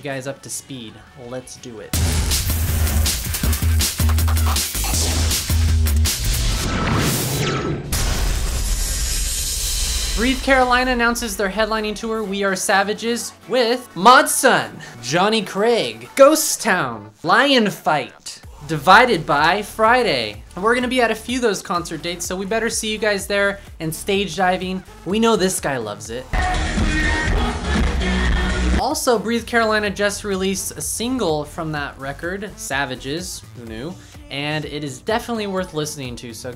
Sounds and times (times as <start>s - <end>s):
Speech: 0.0s - 2.0s, 10.2s - 26.3s, 28.8s - 36.5s
Music: 0.0s - 36.5s.